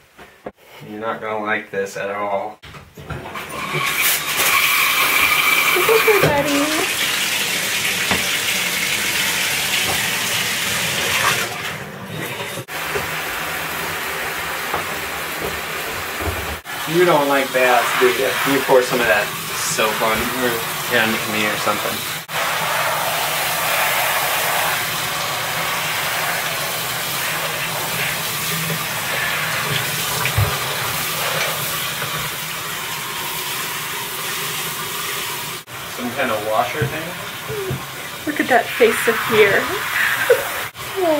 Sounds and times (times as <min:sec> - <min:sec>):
Speech: 0:00.8 - 0:02.6, 0:05.8 - 0:06.9, 0:16.9 - 0:22.0, 0:36.0 - 0:39.8, 0:41.0 - 0:41.1.